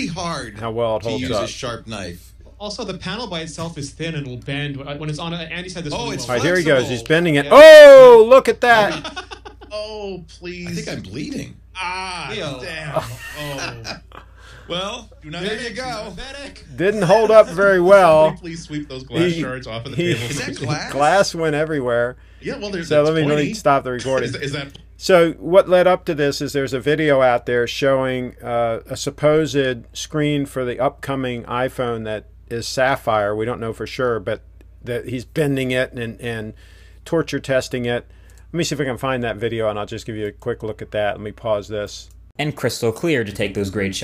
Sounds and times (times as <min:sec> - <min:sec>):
Speech: 0:14.7 - 0:38.0, 0:38.6 - 0:44.0.